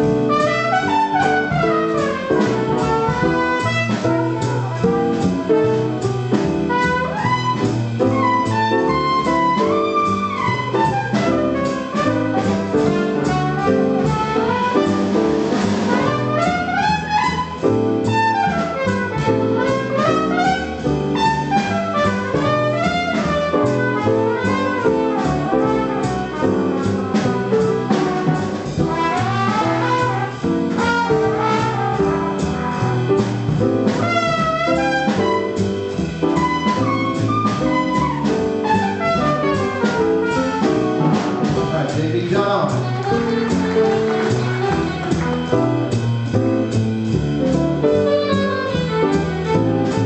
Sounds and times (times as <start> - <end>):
Jazz: 0.0 - 50.0
Musical instrument: 0.0 - 50.0.